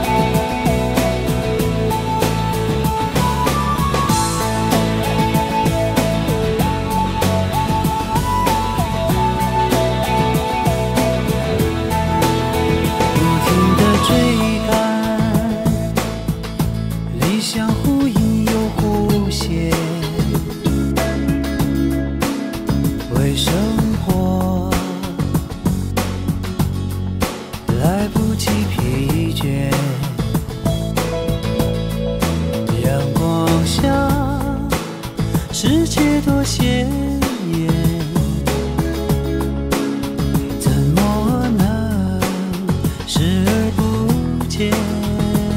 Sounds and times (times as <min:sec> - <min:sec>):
Music: 0:00.0 - 0:45.5.